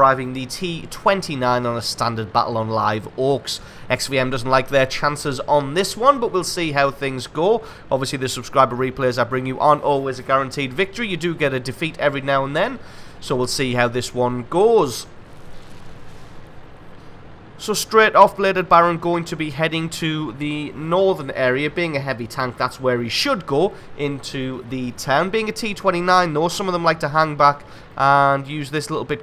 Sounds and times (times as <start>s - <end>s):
Speech: 0.0s - 15.1s, 17.6s - 29.2s.